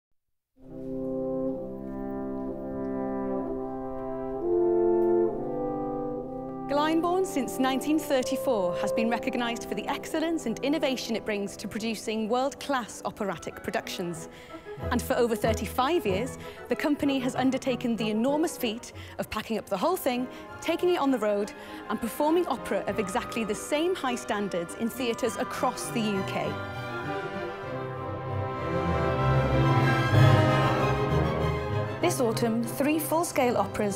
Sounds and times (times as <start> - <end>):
Music: 0.6 - 33.9
Speech: 6.7 - 14.2, 14.9 - 26.5, 32.0 - 33.9.